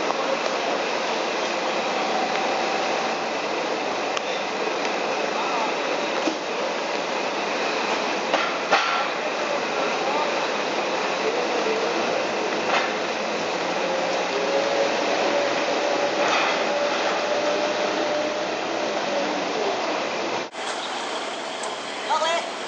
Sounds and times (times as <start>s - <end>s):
Truck: 0.0s - 22.6s
Speech: 5.2s - 6.0s, 9.1s - 10.6s, 22.0s - 22.6s.